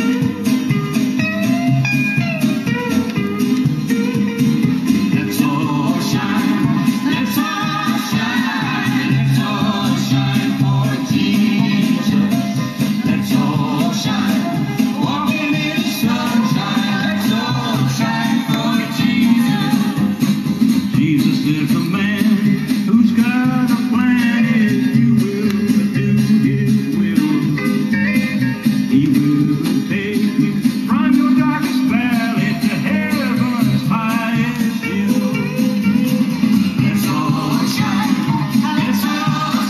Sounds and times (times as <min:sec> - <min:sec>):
Music: 0:00.0 - 0:39.6.